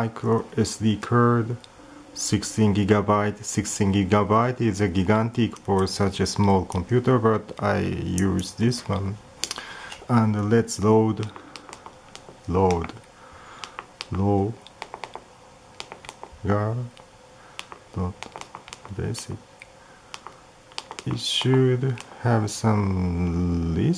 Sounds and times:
Speech: 0.0 - 1.6, 2.2 - 9.2, 10.1 - 11.4, 12.5 - 13.0, 14.1 - 14.7, 16.4 - 17.0, 18.0 - 18.2, 18.9 - 19.4, 21.0 - 23.9.

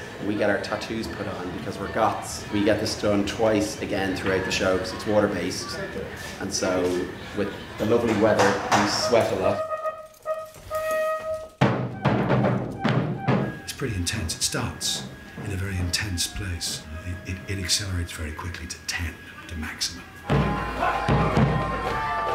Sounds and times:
Timpani: 8.7 - 17.0.

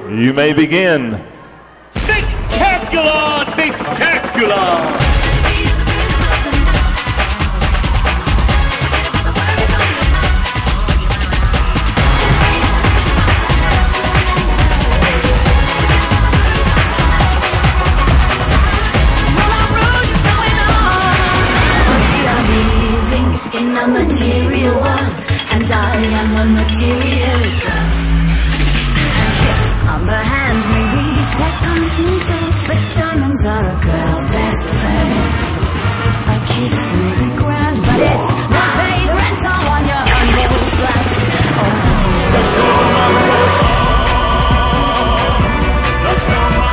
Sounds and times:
Song: 27.1 - 46.7.

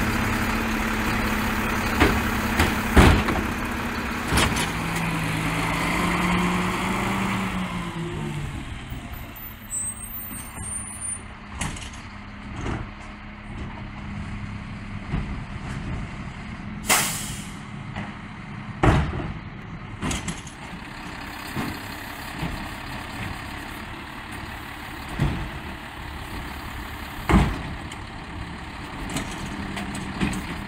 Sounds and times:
Truck: 0.0 - 30.6.

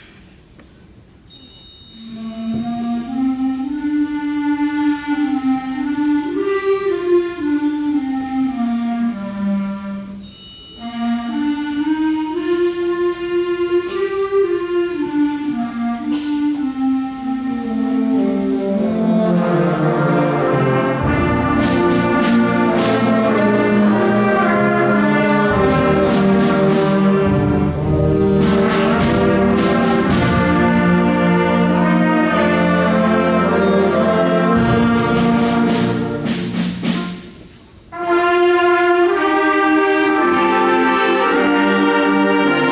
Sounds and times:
Orchestra: 0.0 - 42.7
Classical music: 2.0 - 42.7.

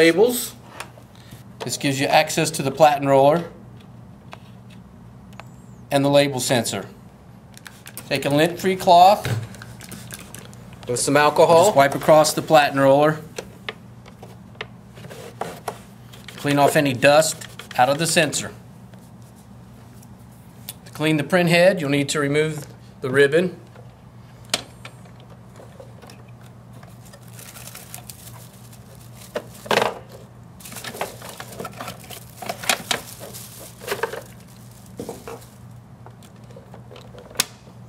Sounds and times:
Speech: 0.0 - 0.6, 1.6 - 3.6, 5.9 - 7.0, 8.1 - 9.3, 10.9 - 13.3, 16.4 - 18.6, 20.9 - 23.6.

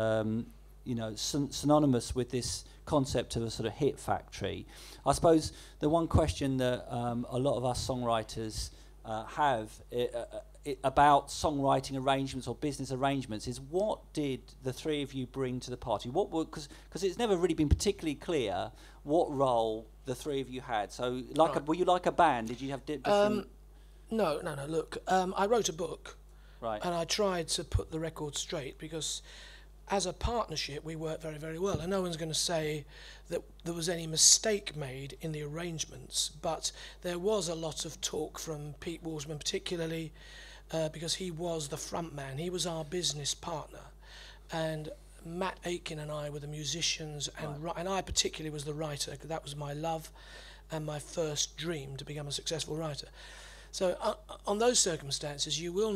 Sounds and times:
Speech: 0.0 - 23.5, 24.1 - 29.2, 29.9 - 40.1, 40.7 - 43.9, 44.5 - 50.1, 50.7 - 53.1, 53.7 - 55.9.

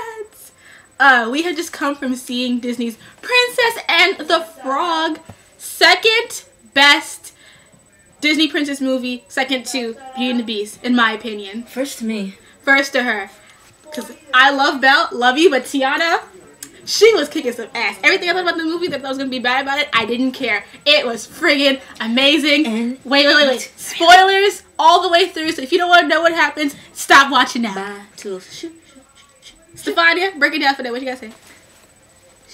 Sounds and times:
Speech: 0.0 - 7.4, 8.2 - 31.4.

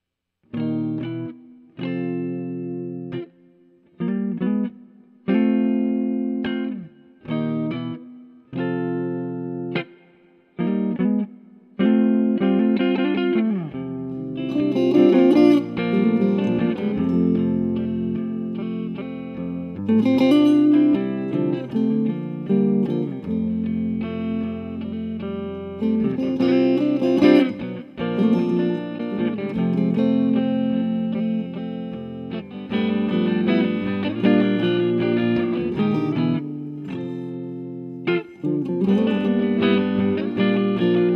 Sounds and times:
Music: 0.0 - 41.1.

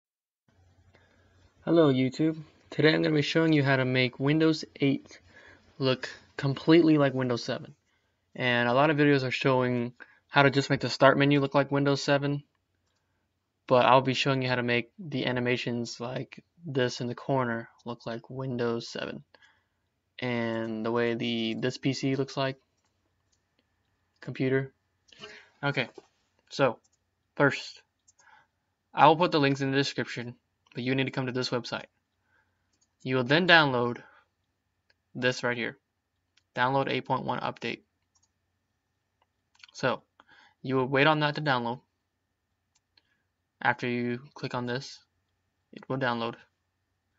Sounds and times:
Speech: 1.6 - 12.5, 13.6 - 19.4, 20.2 - 22.7, 24.2 - 27.9, 28.9 - 32.0, 33.0 - 34.2, 35.1 - 35.8, 36.5 - 37.9, 39.6 - 41.9, 43.6 - 45.1, 45.7 - 46.6.

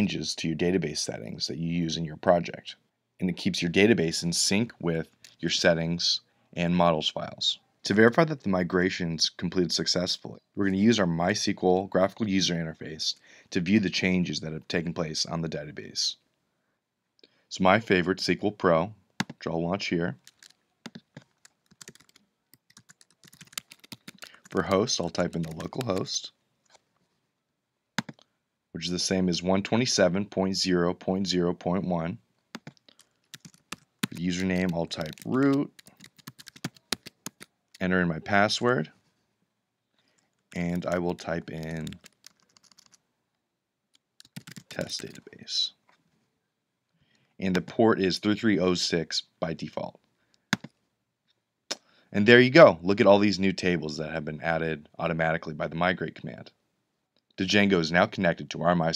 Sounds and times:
Speech: 0.0 - 16.2, 17.5 - 20.2, 24.5 - 26.4, 28.8 - 32.2, 34.1 - 35.8, 37.8 - 39.0, 40.6 - 42.0, 44.7 - 45.8, 47.4 - 50.0, 52.1 - 56.6, 57.4 - 58.9
Inside, small room: 0.0 - 58.9.

